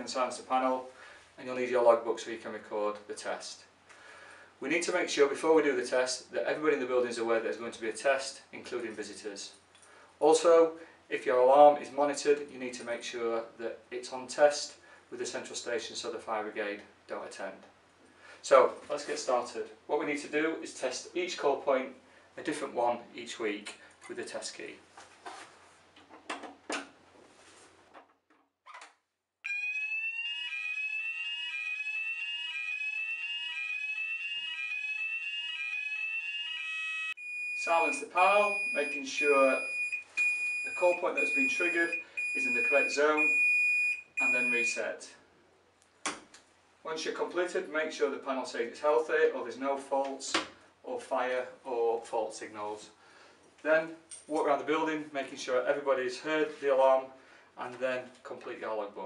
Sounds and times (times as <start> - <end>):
Speech: 0.0 - 3.7, 4.6 - 9.6, 10.2 - 17.7, 18.4 - 24.8, 37.6 - 39.7, 40.7 - 43.4, 44.2 - 45.2, 46.8 - 53.0, 53.6 - 59.0
Fire alarm: 29.4 - 44.8
Smoke detector, smoke alarm: 29.5 - 44.8.